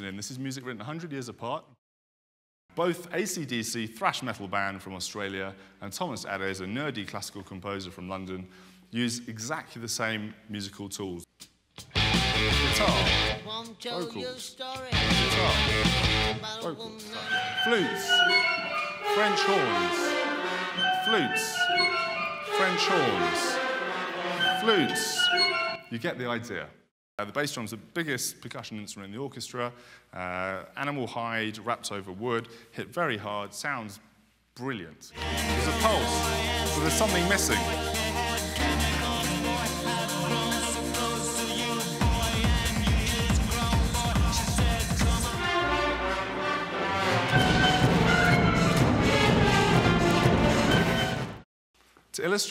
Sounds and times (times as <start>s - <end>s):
Speech: 0.0s - 1.8s, 2.8s - 11.3s, 12.6s - 15.7s, 16.4s - 18.3s, 19.1s - 20.1s, 21.0s - 21.7s, 22.5s - 23.6s, 24.4s - 36.2s, 36.8s - 37.8s, 52.1s - 52.5s
Pop music: 11.9s - 21.9s, 35.2s - 46.4s.